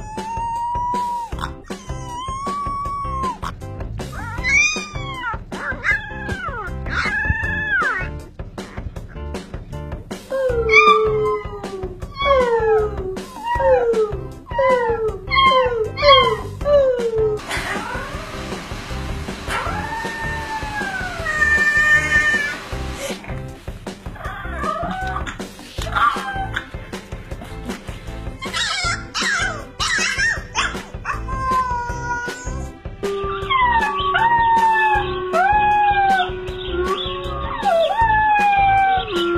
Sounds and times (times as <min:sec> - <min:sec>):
Canidae, dogs, wolves: 0:00.0 - 0:08.1, 0:10.7 - 0:17.0, 0:24.2 - 0:26.8, 0:28.4 - 0:32.2, 0:33.1 - 0:39.3
Music: 0:00.0 - 0:39.3
Dog: 0:24.2 - 0:26.8, 0:28.4 - 0:32.2.